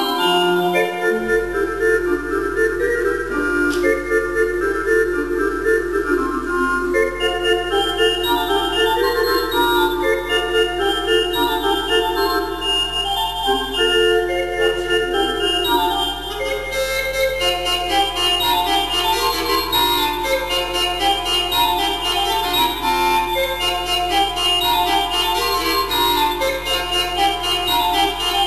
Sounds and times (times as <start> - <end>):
Music: 0.0 - 28.4.